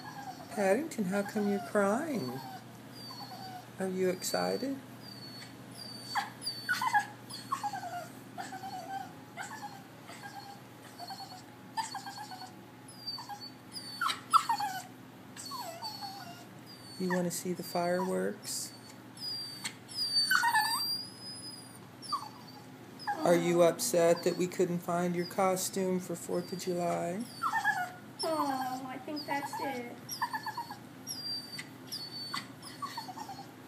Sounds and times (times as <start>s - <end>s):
Domestic animals, pets: 0.0s - 0.6s, 1.2s - 24.6s, 26.4s - 33.6s.